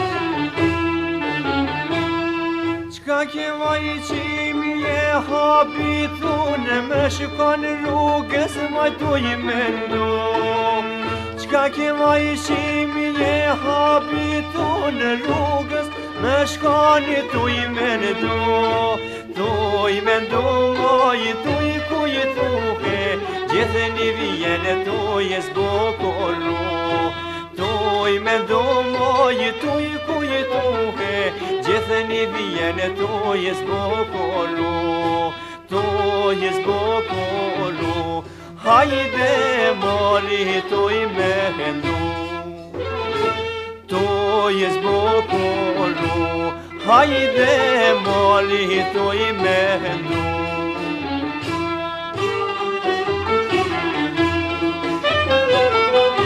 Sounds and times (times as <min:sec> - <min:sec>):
Music: 0:00.0 - 0:56.2.